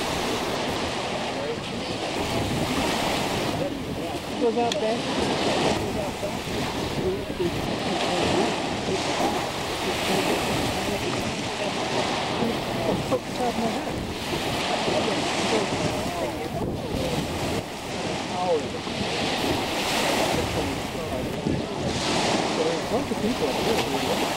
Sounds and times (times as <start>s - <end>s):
Rowboat, canoe, kayak: 0.0s - 24.3s
Speech: 1.2s - 14.0s, 14.6s - 24.3s.